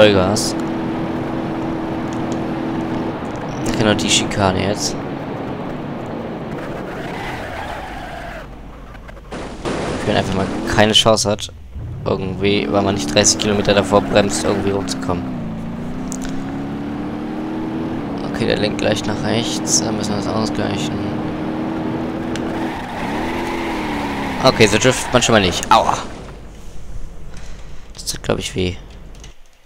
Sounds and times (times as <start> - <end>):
Speech: 0.0 - 0.6, 3.6 - 5.0, 10.0 - 15.3, 18.2 - 21.2, 24.4 - 26.1, 28.0 - 28.8
Race car, auto racing: 0.0 - 10.8, 11.6 - 26.7.